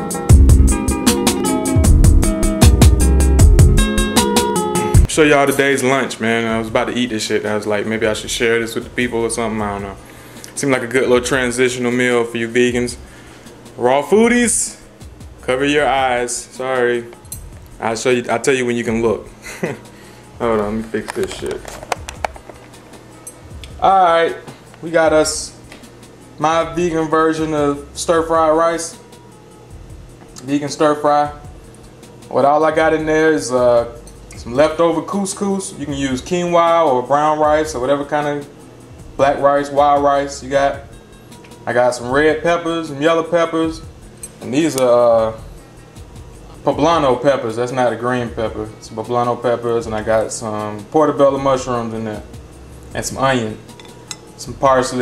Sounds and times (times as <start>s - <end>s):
Music: 0.0s - 55.0s
Speech: 5.1s - 10.0s, 10.6s - 13.0s, 13.8s - 17.2s, 17.8s - 19.3s, 20.4s - 21.7s, 23.8s - 25.6s, 26.4s - 29.0s, 30.4s - 31.4s, 32.3s - 38.5s, 39.2s - 40.9s, 41.7s - 43.8s, 44.4s - 45.4s, 46.6s - 52.3s, 53.0s - 53.7s, 54.4s - 55.0s.